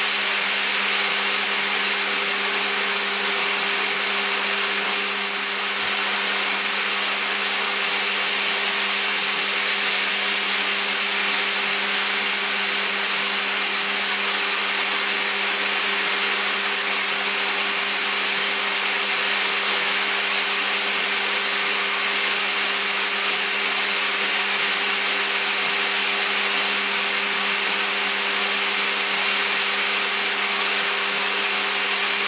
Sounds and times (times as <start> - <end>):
Drill: 0.0 - 32.2.